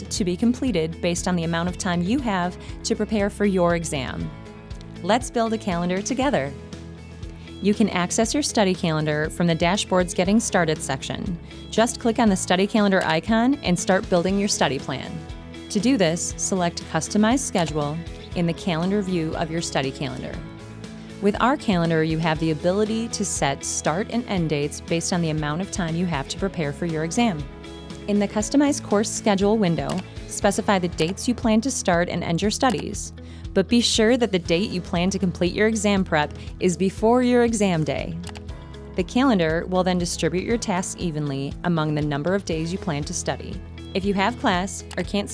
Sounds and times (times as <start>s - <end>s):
Speech: 0.0s - 4.3s, 5.0s - 6.6s, 7.6s - 20.4s, 21.2s - 27.5s, 28.1s - 38.2s, 39.0s - 45.3s
Music: 0.0s - 45.3s.